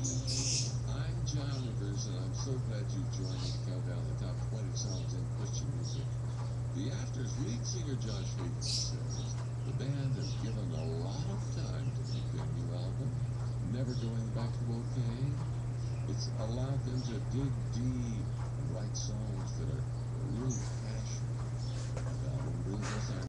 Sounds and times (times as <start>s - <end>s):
Speech: 0.0s - 6.2s, 6.8s - 15.4s, 16.1s - 21.3s, 22.1s - 23.2s.